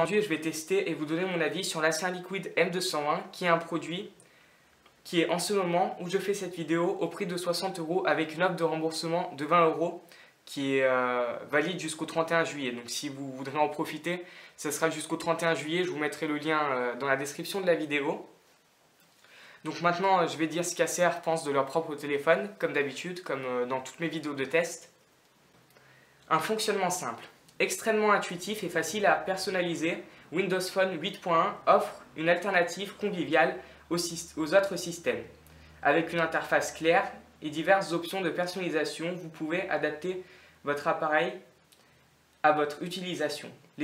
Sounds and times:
Speech: 0:00.0 - 0:04.2, 0:05.0 - 0:18.4, 0:19.6 - 0:25.0, 0:26.3 - 0:41.6, 0:42.4 - 0:43.8.

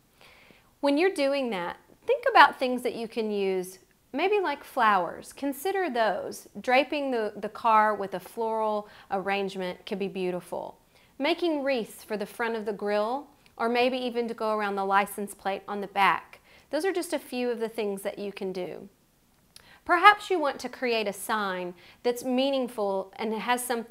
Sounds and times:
Speech: 0:00.8 - 0:18.9, 0:19.9 - 0:23.9.

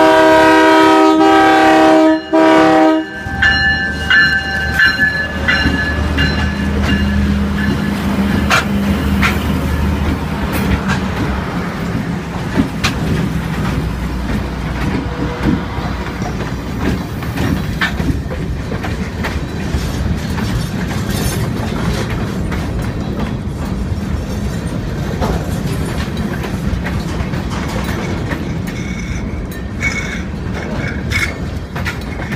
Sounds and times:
Train horn: 0:00.0 - 0:05.7, 0:15.0 - 0:16.0
Railroad car, train wagon: 0:00.0 - 0:32.3.

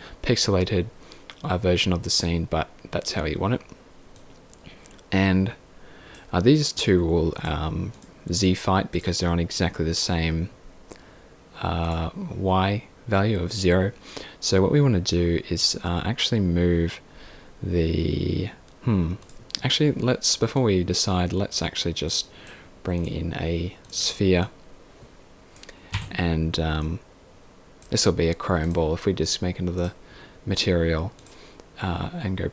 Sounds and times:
Speech: 0:00.2 - 0:03.8, 0:05.1 - 0:05.6, 0:06.3 - 0:10.6, 0:11.6 - 0:17.0, 0:17.6 - 0:24.6, 0:26.0 - 0:27.0, 0:27.8 - 0:31.2, 0:31.8 - 0:32.5.

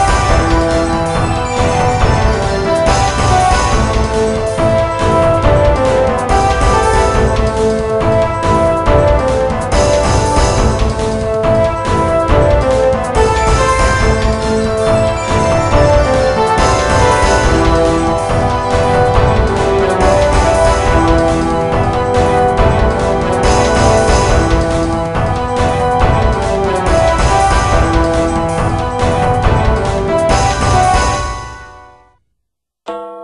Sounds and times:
Music: 0:00.0 - 0:32.3, 0:32.9 - 0:33.2.

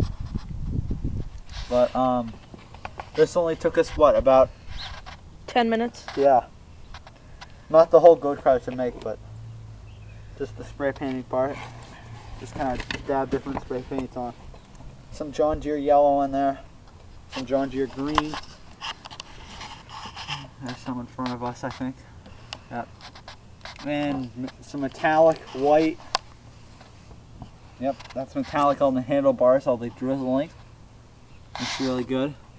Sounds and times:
Speech: 0:01.7 - 0:02.4, 0:03.2 - 0:04.5, 0:05.5 - 0:06.5, 0:07.7 - 0:09.2, 0:10.4 - 0:11.6, 0:12.4 - 0:14.4, 0:15.2 - 0:16.6, 0:17.4 - 0:18.4, 0:20.4 - 0:22.0, 0:22.7 - 0:22.9, 0:23.8 - 0:26.0, 0:27.8 - 0:30.6, 0:31.6 - 0:32.4.

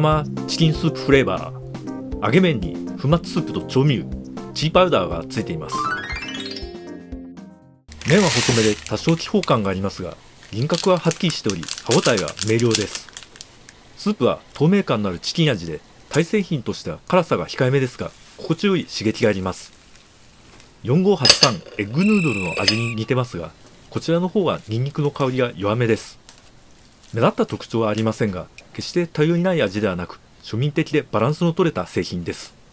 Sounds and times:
Speech: 0:00.0 - 0:01.6, 0:02.2 - 0:05.8, 0:08.0 - 0:13.1, 0:14.0 - 0:19.8, 0:20.8 - 0:26.2, 0:27.1 - 0:32.6.

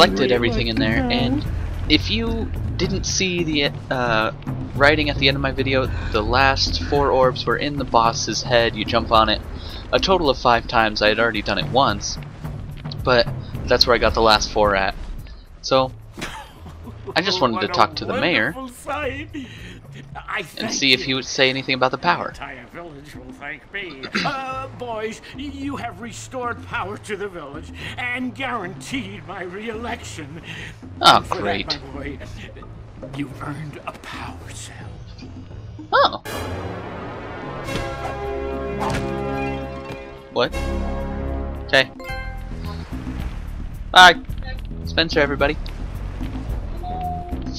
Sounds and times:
Speech: 0:00.0 - 0:12.2, 0:13.0 - 0:15.0, 0:15.6 - 0:15.9, 0:17.0 - 0:32.6, 0:33.2 - 0:35.0, 0:38.8 - 0:39.1, 0:41.7 - 0:41.9, 0:44.0 - 0:45.6
Music: 0:00.0 - 0:47.5.

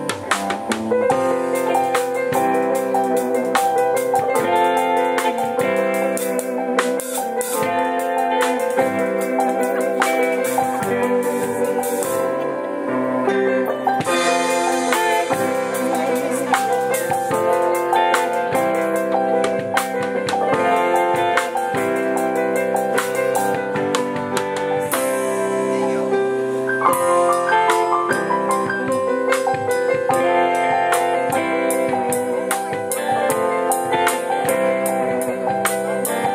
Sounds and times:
Soul music: 0:00.0 - 0:36.3.

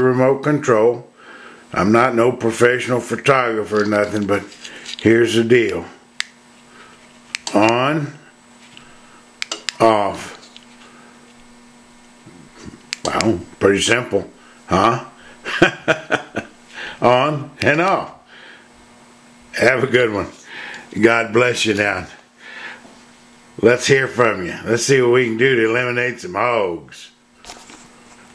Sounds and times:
Speech: 0:00.0 - 0:01.1, 0:01.7 - 0:06.0, 0:07.5 - 0:08.3, 0:09.8 - 0:10.4, 0:13.0 - 0:15.2, 0:17.0 - 0:18.2, 0:19.5 - 0:22.2, 0:23.6 - 0:27.2.

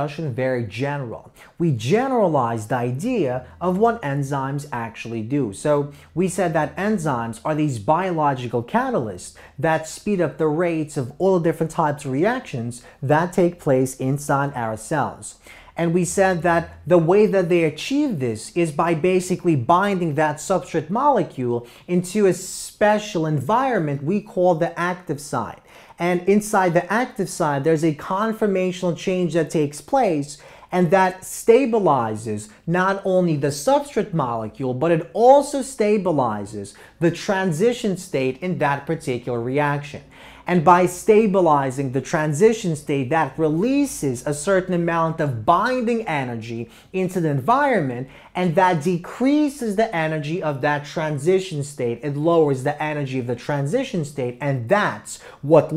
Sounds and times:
Speech: 0:00.0 - 0:55.7.

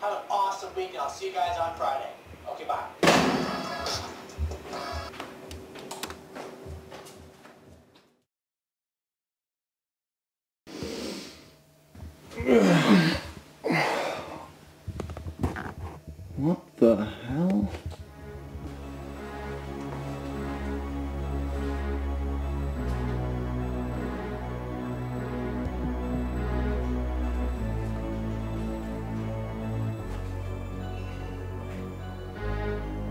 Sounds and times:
Speech: 0:00.0 - 0:03.0, 0:16.4 - 0:17.8
Music: 0:03.2 - 0:05.1, 0:17.1 - 0:33.1.

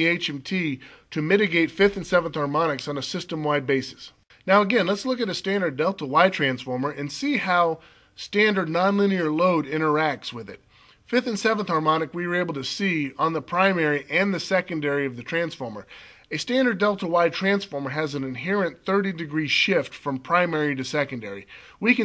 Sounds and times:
Speech: 0:00.0 - 0:22.0.

